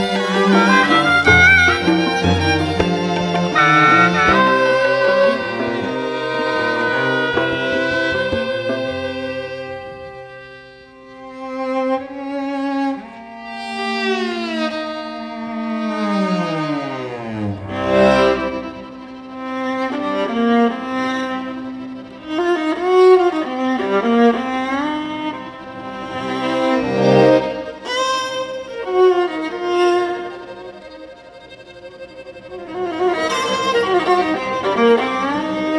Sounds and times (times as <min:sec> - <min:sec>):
String section: 0:00.0 - 0:35.7.